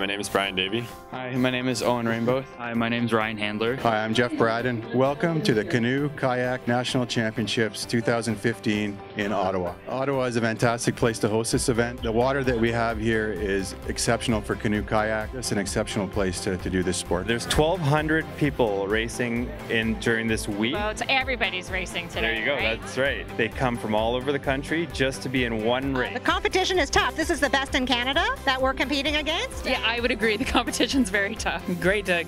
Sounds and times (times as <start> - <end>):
Music: 0.0 - 32.2.